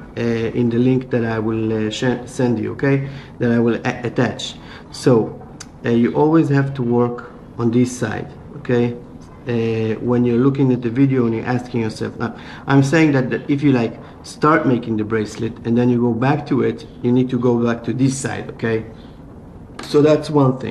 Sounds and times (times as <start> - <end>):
Speech: 0.0 - 19.0, 19.8 - 20.7.